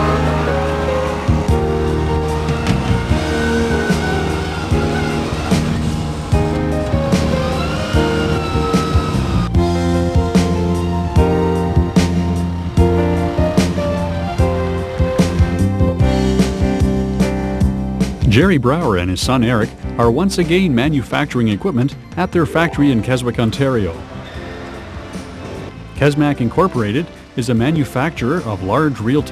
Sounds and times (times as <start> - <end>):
Music: 0.0 - 29.3.